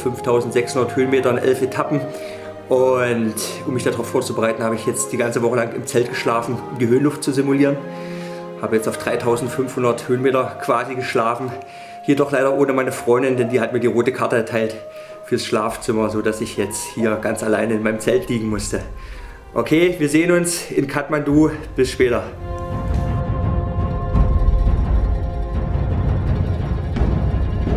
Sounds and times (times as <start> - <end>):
Speech: 0.0 - 2.1, 2.7 - 7.8, 8.6 - 19.0, 19.6 - 22.4
Music: 0.0 - 27.7.